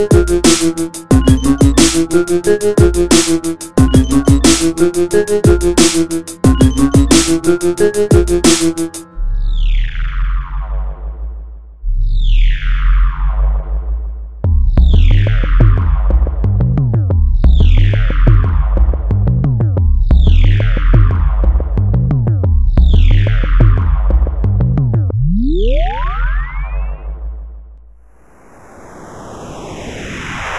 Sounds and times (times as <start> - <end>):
Techno: 0.0 - 9.1
Trance music: 0.0 - 11.3, 25.2 - 27.2.